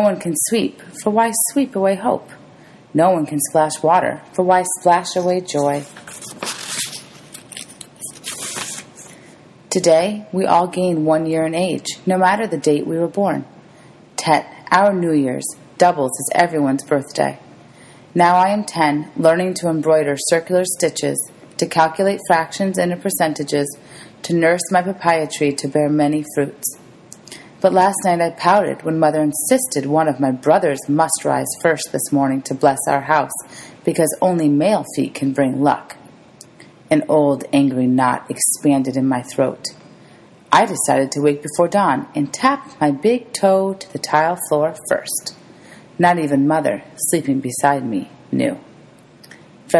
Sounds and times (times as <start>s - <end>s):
Speech: 0.0s - 2.4s, 3.0s - 6.0s, 9.7s - 13.5s, 14.2s - 17.4s, 18.2s - 26.8s, 27.6s - 36.0s, 36.9s - 39.8s, 40.5s - 45.4s, 46.0s - 48.7s.